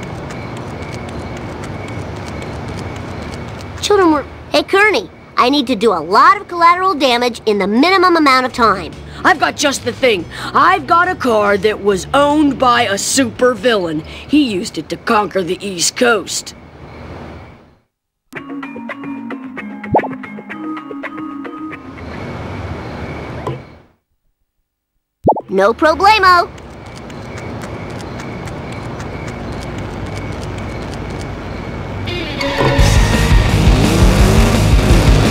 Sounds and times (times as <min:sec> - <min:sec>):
Speech: 0:03.8 - 0:16.6, 0:25.5 - 0:26.5.